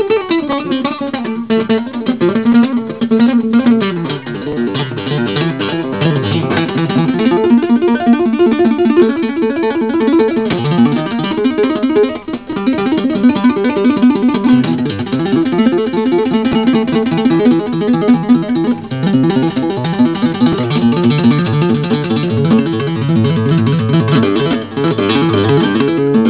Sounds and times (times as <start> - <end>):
Tapping (guitar technique): 0.0 - 26.3.